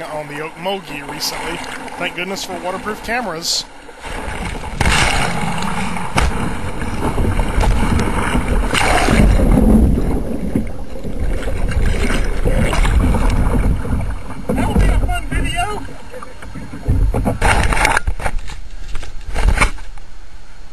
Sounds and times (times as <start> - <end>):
Speech: 0.0 - 3.7, 14.5 - 15.9
Rowboat, canoe, kayak: 0.0 - 20.7.